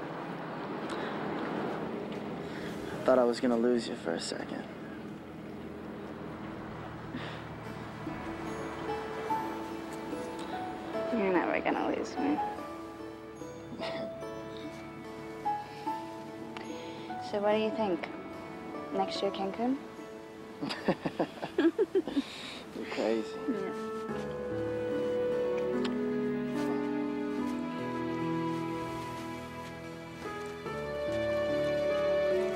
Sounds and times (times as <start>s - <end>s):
Outside, rural or natural: 0.0s - 32.5s
Music: 6.6s - 32.5s.